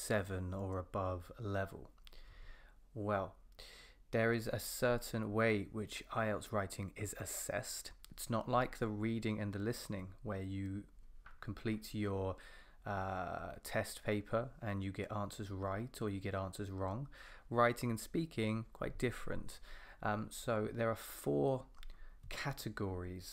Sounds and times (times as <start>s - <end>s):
Speech: 0.0s - 1.9s, 3.0s - 3.4s, 4.1s - 21.7s, 22.3s - 23.3s.